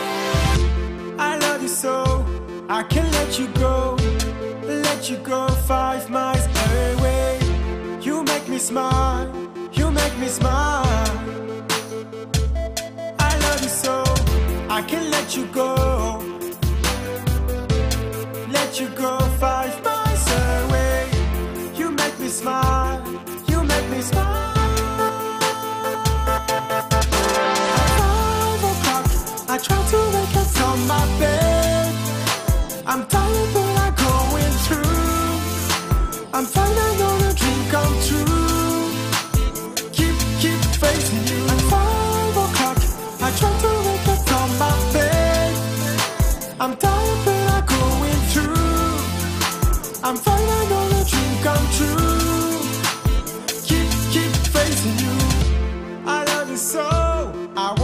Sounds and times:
Music: 0.0s - 57.8s.

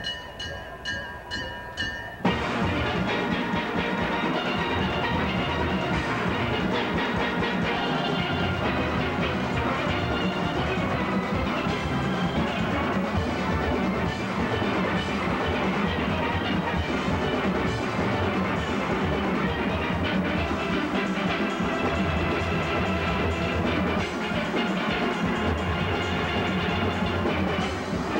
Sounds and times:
Orchestra: 2.2s - 28.1s.

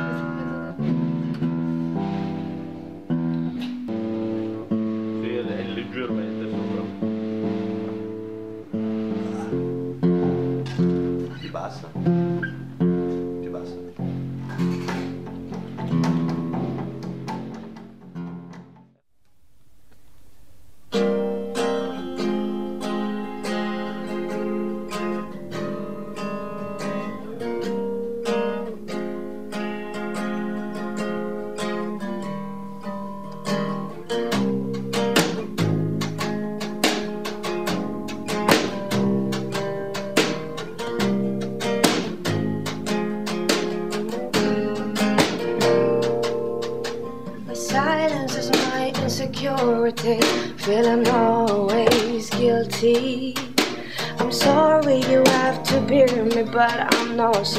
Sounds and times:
Music: 0.0s - 19.1s, 20.6s - 57.5s.

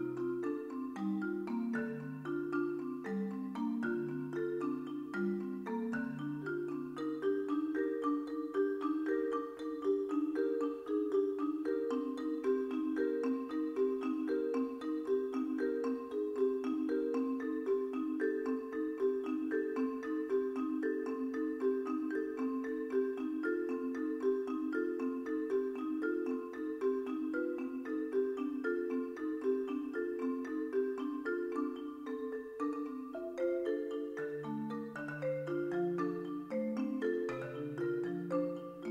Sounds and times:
Marimba, xylophone: 0.0s - 38.9s
Vibraphone: 0.0s - 38.9s.

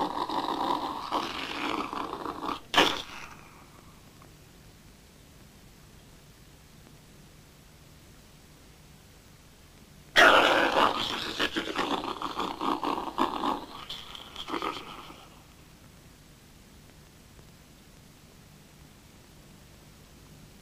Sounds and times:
Inside, small room: 0.0s - 20.6s
Silence: 3.2s - 10.2s.

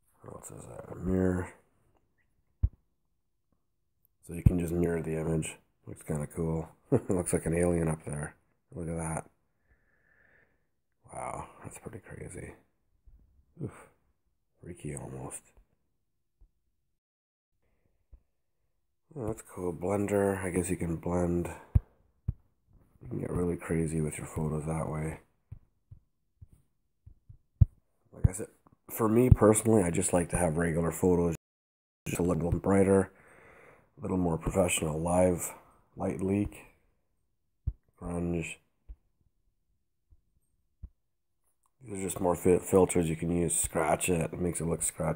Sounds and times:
Speech: 0.1s - 1.7s, 4.2s - 9.4s, 11.0s - 12.7s, 13.6s - 14.0s, 14.6s - 15.6s, 19.1s - 21.8s, 23.0s - 25.3s, 28.1s - 31.4s, 32.1s - 33.2s, 34.0s - 36.8s, 37.9s - 38.7s, 41.8s - 45.1s.

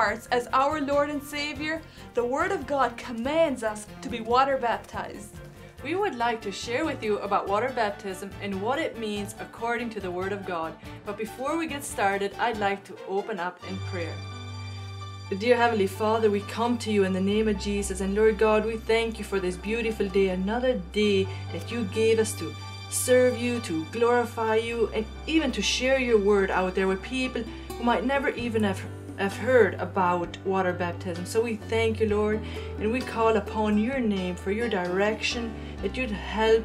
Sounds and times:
Speech: 0.0s - 14.2s, 15.3s - 36.6s
Music: 0.0s - 36.6s.

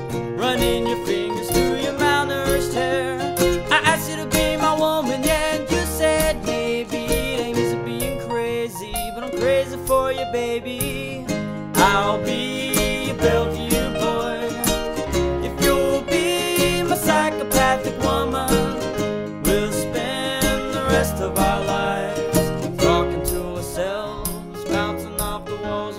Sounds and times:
Guitar: 0.0s - 25.9s
Singing: 0.4s - 14.8s, 15.4s - 18.9s, 19.5s - 25.9s.

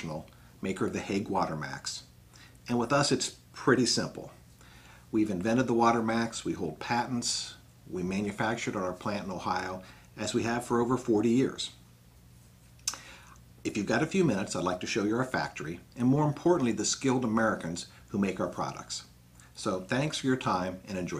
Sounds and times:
Speech: 0.0s - 2.1s, 2.7s - 4.4s, 5.1s - 11.8s, 13.6s - 21.1s.

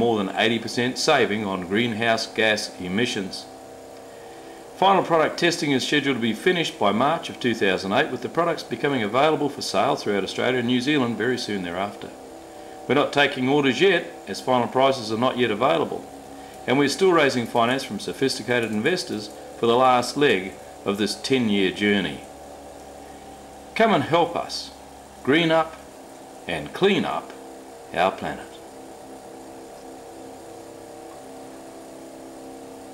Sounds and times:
Speech: 0.0s - 3.5s, 4.8s - 12.2s, 12.9s - 16.1s, 16.7s - 22.3s, 23.8s - 25.8s, 26.5s - 28.6s.

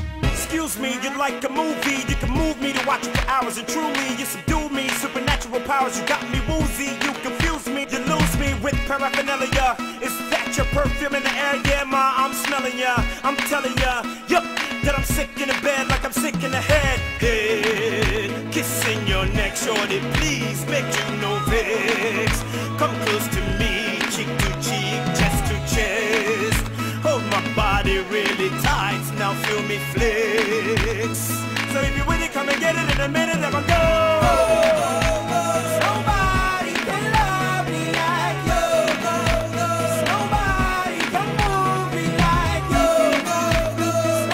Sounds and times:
Hip hop music: 0.0s - 44.3s.

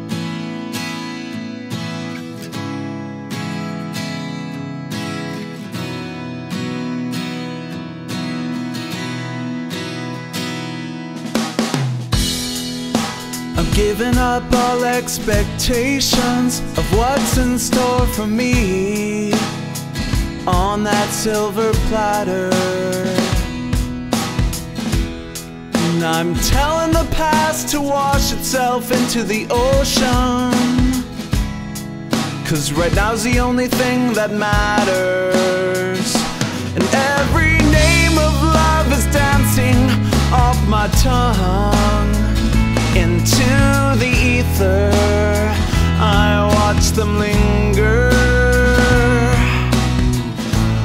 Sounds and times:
Rhythm and blues: 0.0s - 50.8s.

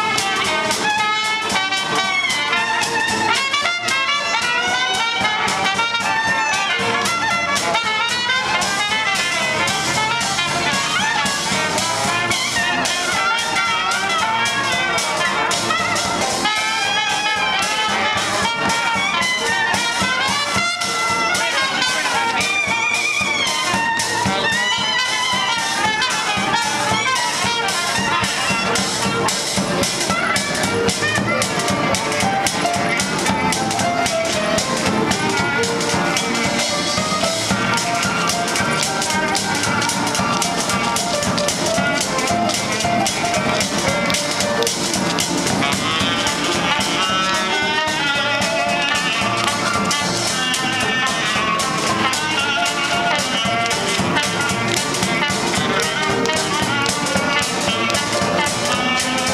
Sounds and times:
Music: 0.0s - 59.3s.

